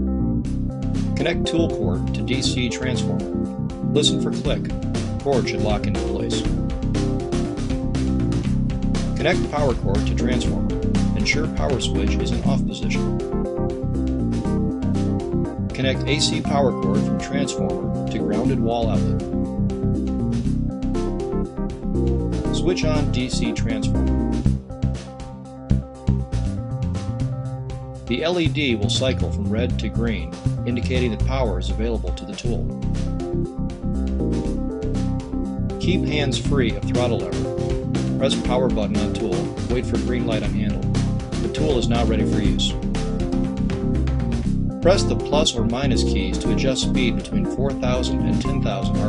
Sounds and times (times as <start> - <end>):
Music: 0.0 - 49.0
Speech: 1.2 - 3.3, 3.9 - 6.5, 9.2 - 13.1, 15.8 - 19.2, 22.5 - 24.0, 28.1 - 32.7, 35.8 - 37.4, 38.2 - 40.8, 41.4 - 42.8, 44.8 - 49.0.